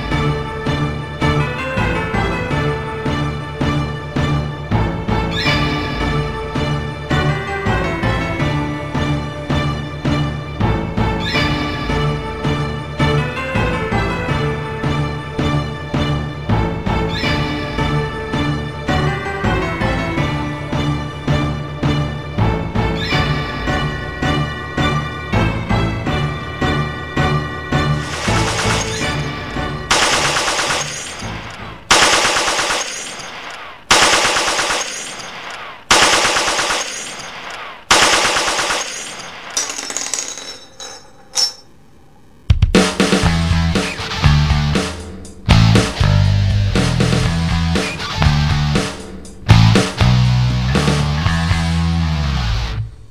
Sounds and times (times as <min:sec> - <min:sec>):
Music: 0:00.0 - 0:33.3, 0:33.9 - 0:35.0, 0:35.9 - 0:36.9, 0:42.4 - 0:53.1.